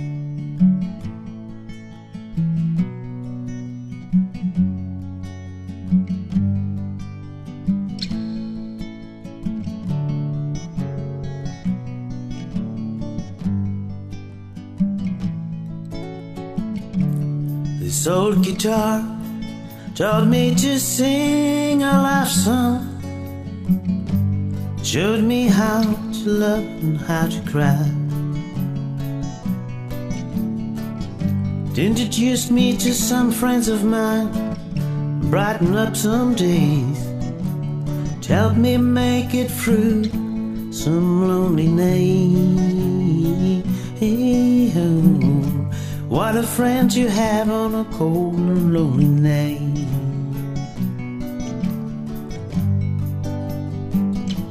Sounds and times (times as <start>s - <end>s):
Strum: 0.0s - 54.5s.